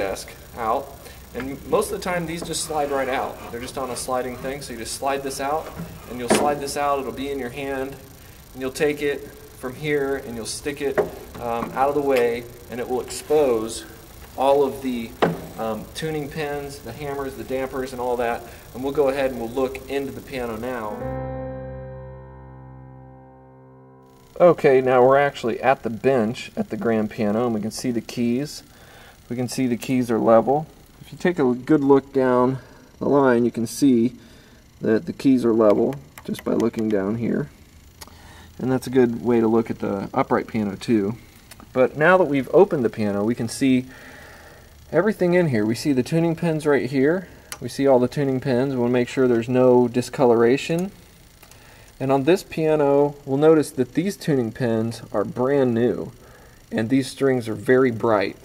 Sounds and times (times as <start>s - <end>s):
Speech: 0.0s - 21.0s, 24.4s - 28.7s, 29.3s - 34.2s, 34.8s - 37.5s, 38.6s - 41.2s, 41.8s - 43.9s, 44.9s - 51.0s, 52.0s - 58.4s.